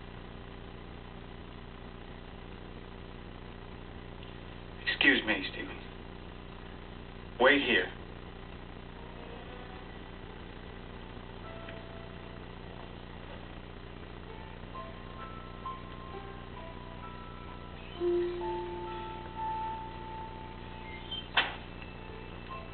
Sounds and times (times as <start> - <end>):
Music: 9.0 - 22.7.